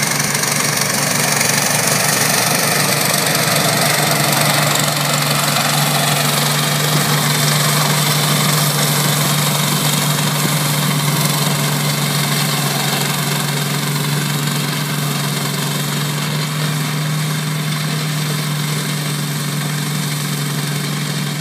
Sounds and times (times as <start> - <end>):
Lawn mower: 0.0 - 21.4
Vehicle: 0.0 - 21.4.